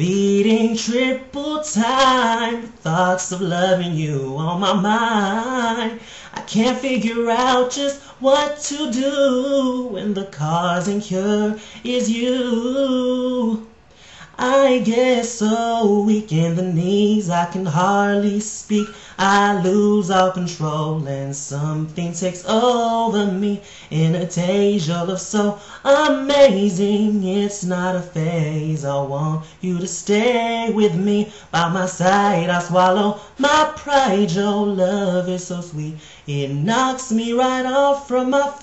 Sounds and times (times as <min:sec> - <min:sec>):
Male singing: 0:00.0 - 0:38.6.